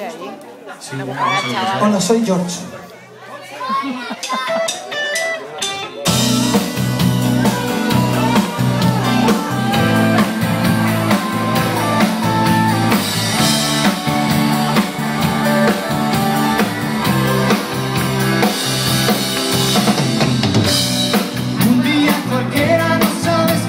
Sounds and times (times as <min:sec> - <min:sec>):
Music: 0:04.3 - 0:23.6.